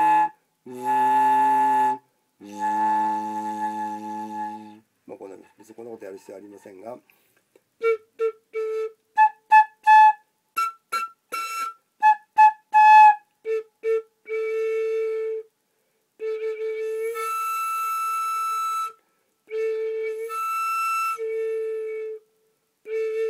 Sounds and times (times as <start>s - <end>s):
Flute: 0.0s - 5.6s, 7.8s - 15.5s, 16.2s - 23.2s
Speech: 5.1s - 7.1s.